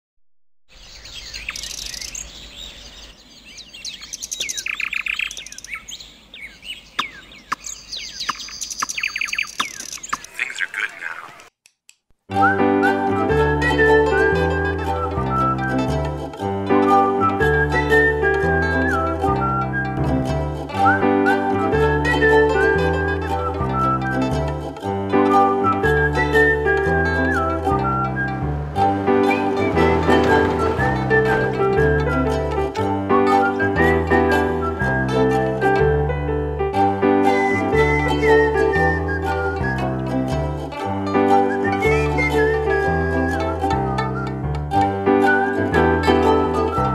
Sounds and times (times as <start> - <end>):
Chirp, tweet: 0.7 - 10.3.